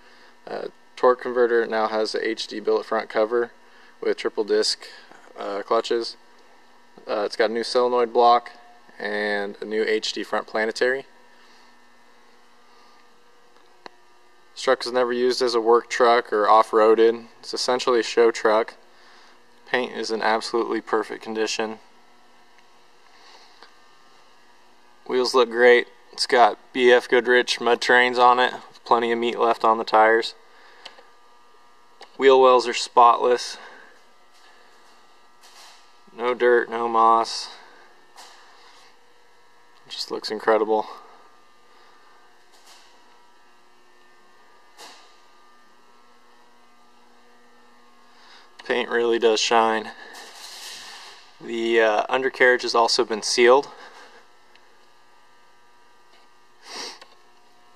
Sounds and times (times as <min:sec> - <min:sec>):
Speech: 0:00.4 - 0:06.2, 0:07.0 - 0:11.1, 0:14.6 - 0:18.8, 0:19.7 - 0:21.8, 0:25.0 - 0:30.4, 0:32.2 - 0:33.8, 0:36.1 - 0:37.7, 0:39.9 - 0:41.1, 0:48.6 - 0:50.2, 0:51.4 - 0:53.8.